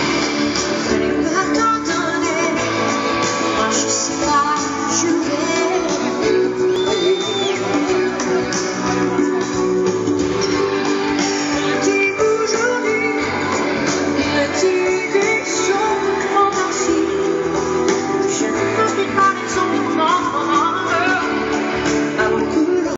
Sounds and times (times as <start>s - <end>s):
Blues: 0.0s - 22.9s.